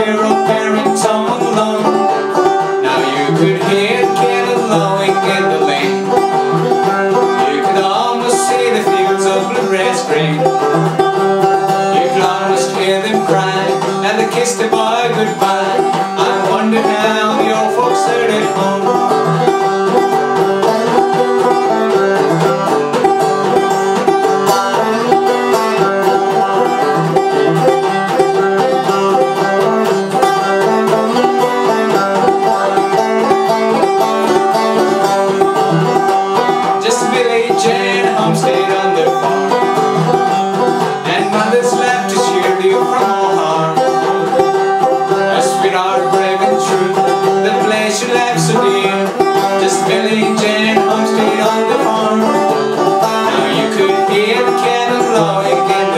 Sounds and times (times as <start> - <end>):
Male singing: 0.0 - 2.1, 2.8 - 6.2, 7.2 - 10.6, 11.7 - 19.2, 36.6 - 39.4, 41.0 - 44.1, 45.1 - 55.9
Music: 0.0 - 55.9.